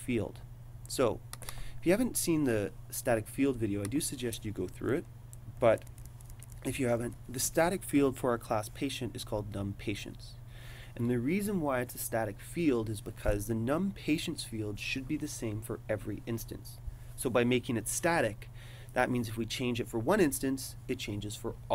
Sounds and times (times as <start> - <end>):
Speech: 0.0 - 1.2, 1.8 - 5.8, 6.6 - 10.4, 11.0 - 21.7.